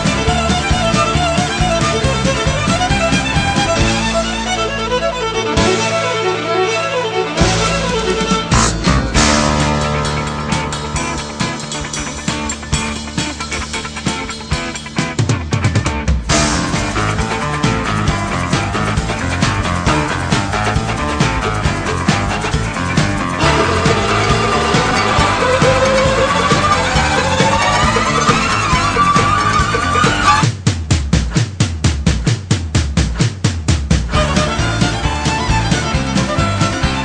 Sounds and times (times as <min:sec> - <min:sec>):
Rhythm and blues: 0:00.0 - 0:37.0.